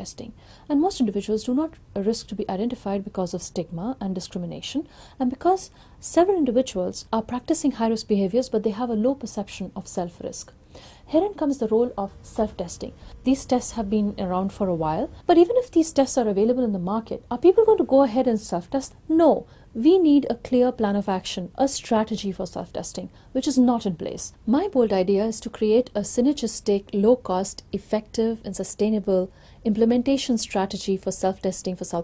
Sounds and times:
Speech: 0:00.0 - 0:32.0.

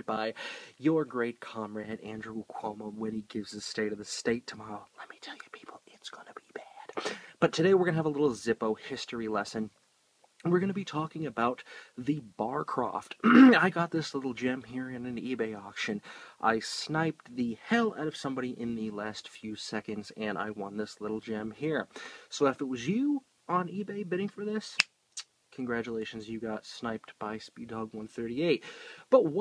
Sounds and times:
Speech: 0:00.0 - 0:06.8, 0:07.4 - 0:09.7, 0:10.4 - 0:24.8, 0:25.5 - 0:29.4
Inside, small room: 0:00.0 - 0:29.4
Whispering: 0:04.5 - 0:07.0.

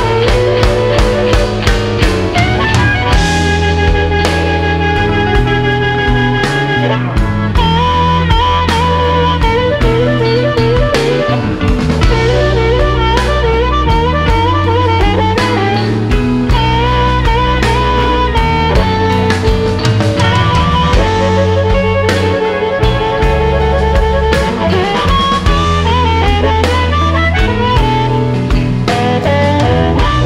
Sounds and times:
Guitar: 0:00.0 - 0:30.2.

